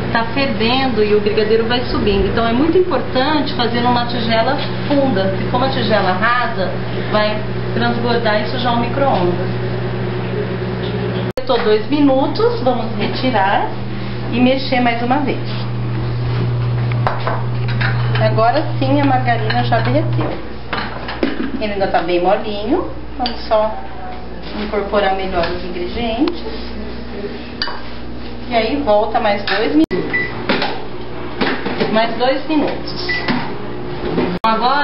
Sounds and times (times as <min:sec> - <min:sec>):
Microwave oven: 0:00.0 - 0:21.9, 0:25.2 - 0:34.8
Speech: 0:00.1 - 0:09.5, 0:11.4 - 0:15.5, 0:18.2 - 0:20.3, 0:21.6 - 0:27.4, 0:28.5 - 0:30.1, 0:31.8 - 0:33.2, 0:34.4 - 0:34.8.